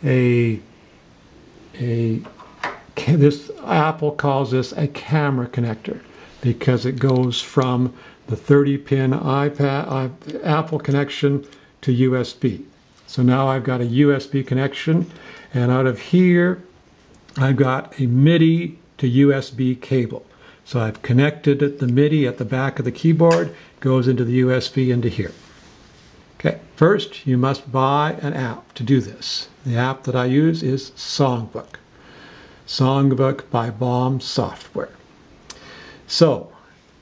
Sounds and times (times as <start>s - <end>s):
Speech: 0.0s - 0.7s, 1.7s - 2.4s, 3.0s - 16.7s, 17.3s - 25.4s, 26.4s - 31.8s, 32.7s - 35.0s, 36.1s - 36.7s.